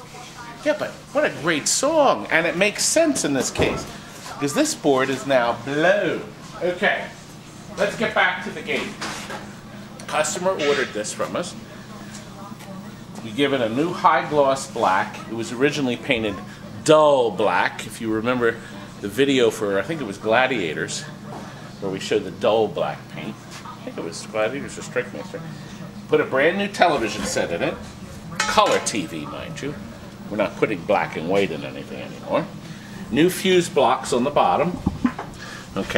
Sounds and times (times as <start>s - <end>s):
Speech: 0.0s - 34.8s, 35.7s - 35.9s.